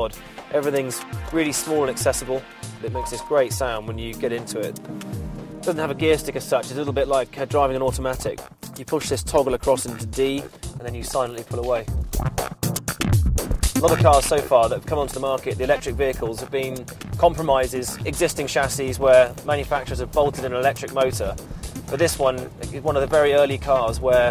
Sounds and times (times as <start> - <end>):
Speech: 0.0 - 4.8, 5.7 - 11.9, 13.8 - 24.3
Music: 0.0 - 24.3.